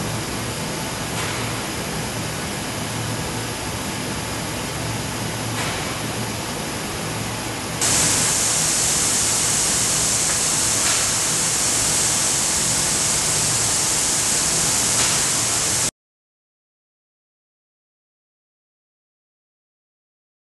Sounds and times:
Spray: 7.8 - 15.9.

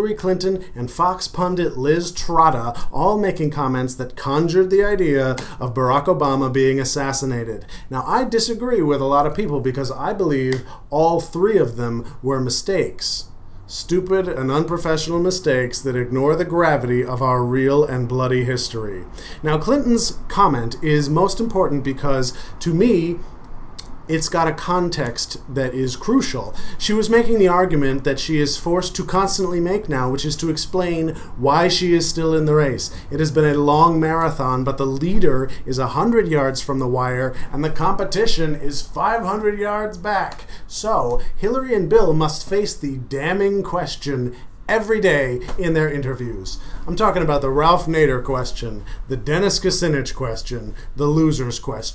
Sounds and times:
Speech: 0.0 - 23.2, 23.8 - 51.9.

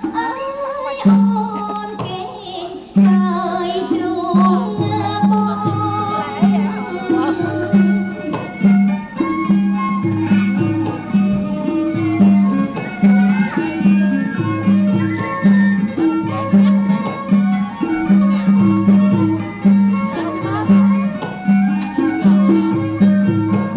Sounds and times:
Traditional music: 0.0 - 23.7
Speech: 0.2 - 8.3, 13.1 - 18.9, 19.9 - 21.4.

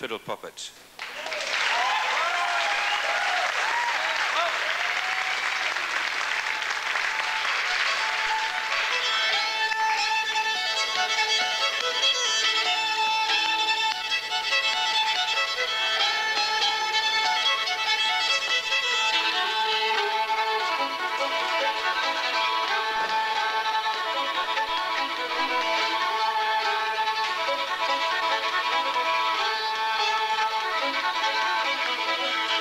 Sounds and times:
Violin, fiddle: 7.0 - 32.6.

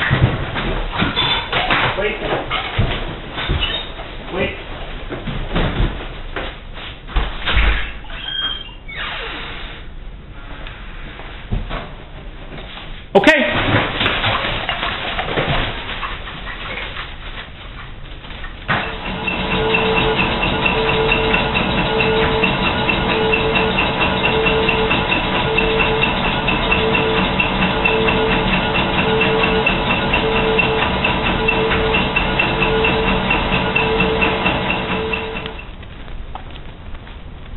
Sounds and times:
Speech: 2.0 - 2.4, 4.3 - 4.7, 13.2 - 13.6.

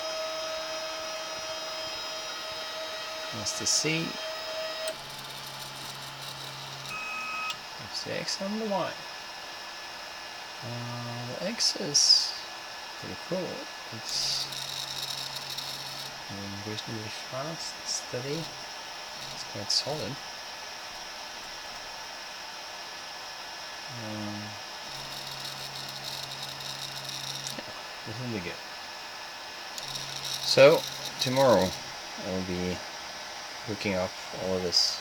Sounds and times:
Speech: 3.3 - 4.2, 7.8 - 9.0, 10.6 - 14.5, 16.3 - 18.5, 19.4 - 20.2, 23.9 - 24.6, 28.1 - 28.6, 30.5 - 32.8, 33.7 - 35.0.

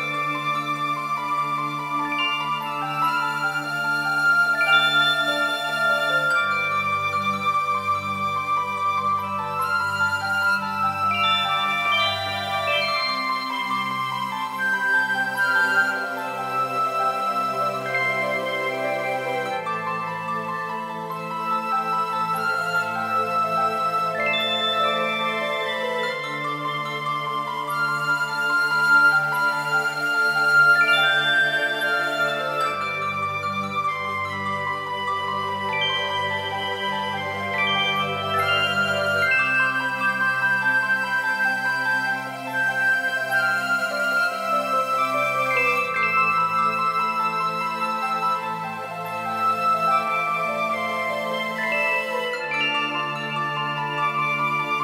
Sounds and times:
Jingle (music): 0.0 - 54.8.

